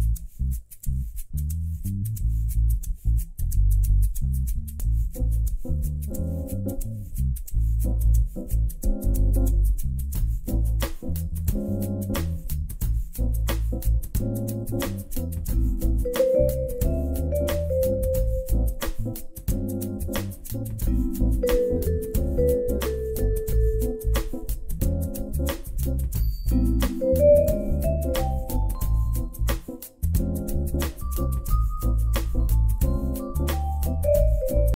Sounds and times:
Music: 0.0s - 34.7s.

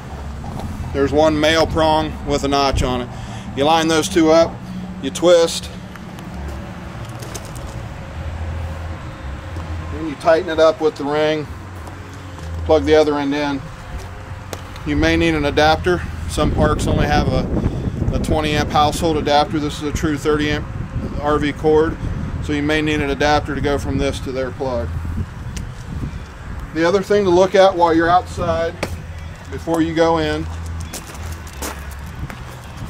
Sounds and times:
Speech: 1.0s - 5.7s, 9.9s - 11.5s, 12.7s - 13.6s, 14.9s - 17.5s, 18.1s - 20.6s, 21.2s - 24.9s, 26.8s - 28.8s, 29.5s - 30.5s.

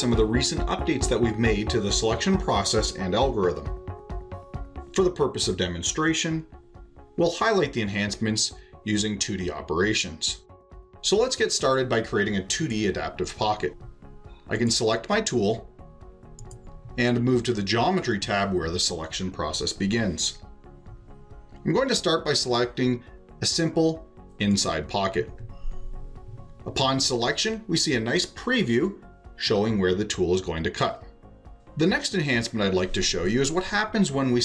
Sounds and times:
Speech: 0.0s - 3.8s, 4.9s - 6.5s, 7.2s - 10.4s, 11.0s - 13.8s, 14.5s - 15.7s, 17.0s - 20.4s, 21.6s - 25.4s, 26.6s - 31.1s, 31.8s - 34.4s.

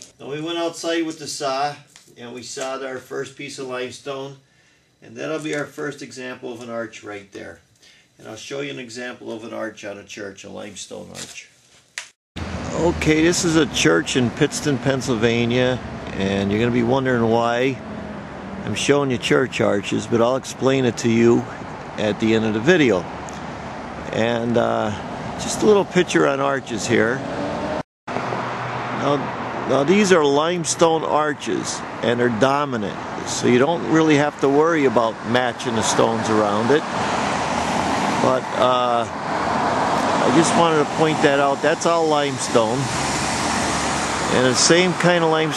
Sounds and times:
Speech: 0.2s - 4.4s, 5.0s - 7.6s, 8.2s - 11.5s, 12.6s - 17.8s, 18.6s - 23.1s, 24.1s - 27.2s, 29.0s - 36.9s, 38.2s - 39.1s, 40.2s - 42.9s, 44.3s - 45.5s
Outside, urban or manmade: 11.0s - 45.5s.

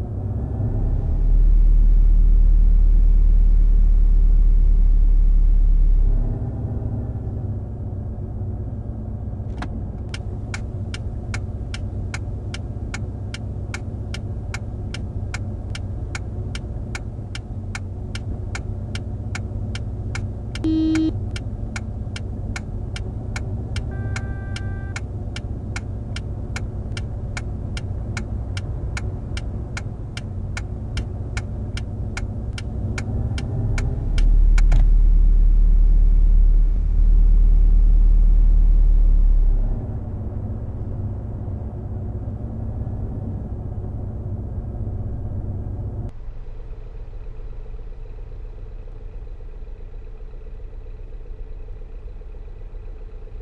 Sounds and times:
Vehicle: 0.0s - 53.4s.

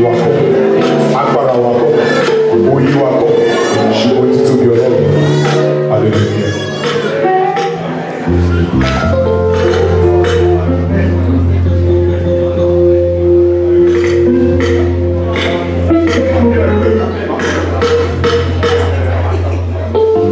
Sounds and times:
Speech: 0.0s - 9.1s, 15.3s - 20.3s
Background music: 0.0s - 20.3s.

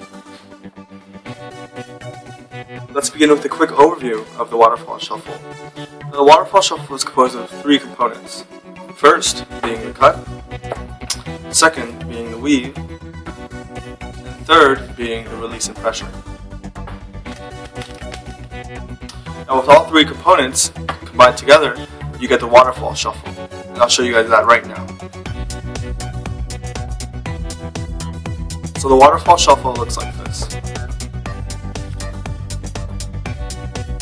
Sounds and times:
Music: 0.0s - 34.0s
Speech: 3.0s - 5.4s, 6.1s - 10.2s, 11.5s - 12.8s, 14.4s - 16.2s, 19.5s - 25.0s, 28.8s - 30.6s.

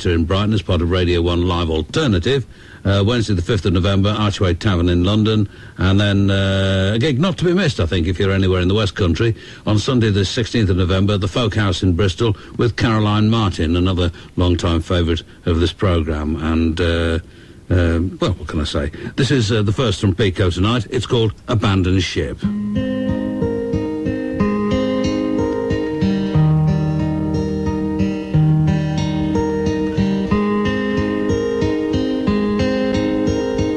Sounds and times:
Speech: 0.0s - 22.5s.

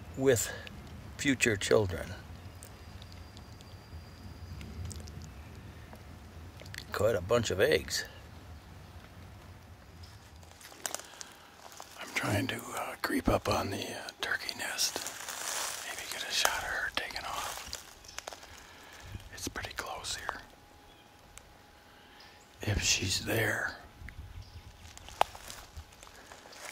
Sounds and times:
Speech: 0.2s - 2.2s, 6.8s - 8.2s, 12.0s - 15.0s, 22.6s - 23.9s.

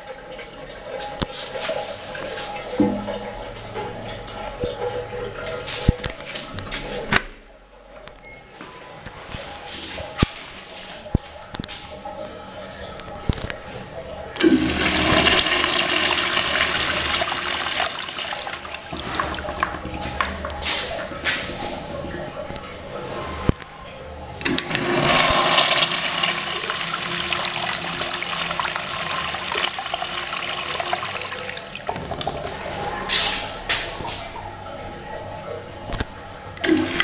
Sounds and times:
Toilet flush: 0.0s - 6.4s, 14.4s - 22.4s, 24.4s - 34.1s, 36.6s - 37.0s.

